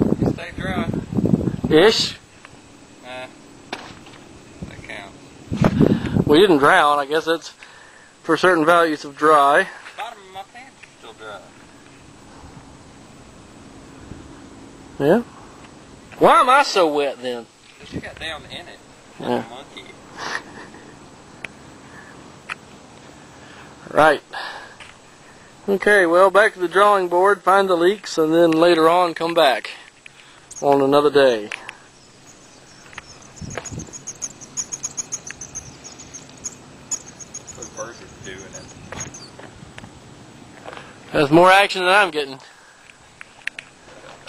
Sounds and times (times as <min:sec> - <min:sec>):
Outside, rural or natural: 0:00.0 - 0:44.2
Bird vocalization, bird call, bird song: 0:31.8 - 0:39.4.